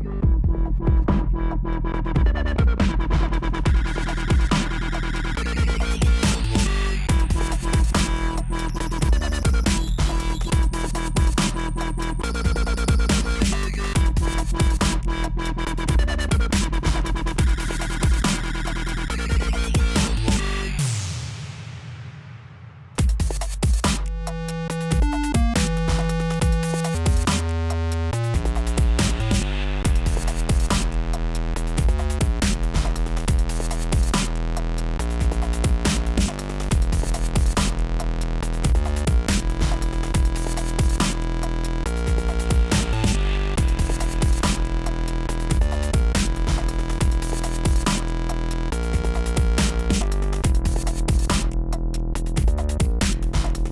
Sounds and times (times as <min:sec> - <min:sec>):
Dubstep: 0:00.0 - 0:53.7.